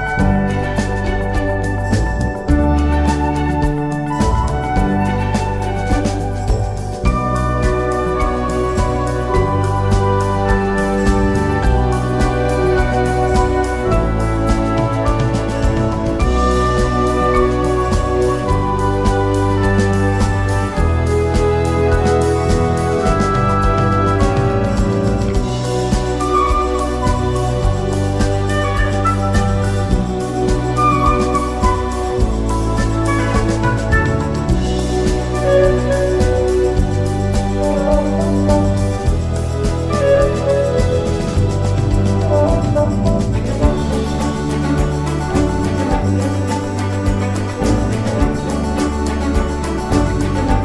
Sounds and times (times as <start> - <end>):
Music: 0.0 - 50.6.